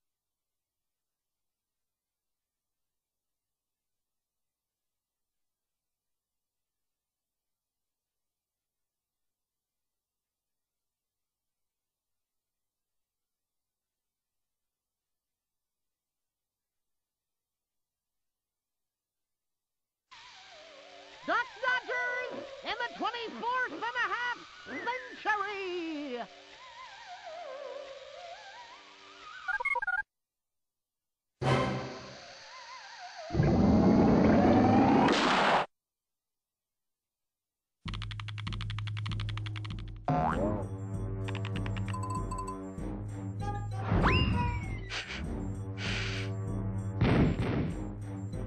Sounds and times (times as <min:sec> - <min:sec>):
Speech: 0:21.3 - 0:26.3.